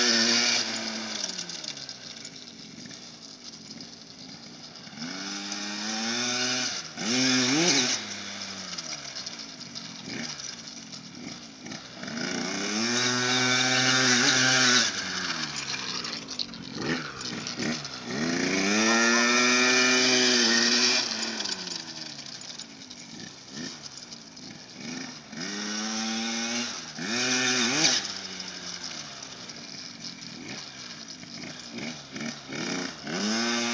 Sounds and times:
Motorcycle: 0.0s - 33.7s
Outside, rural or natural: 0.0s - 33.7s.

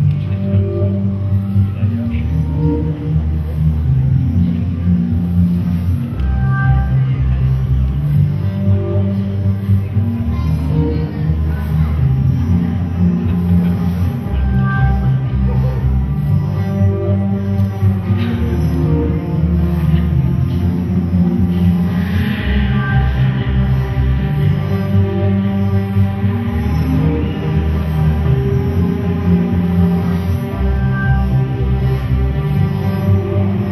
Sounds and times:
Music: 0.0s - 33.7s.

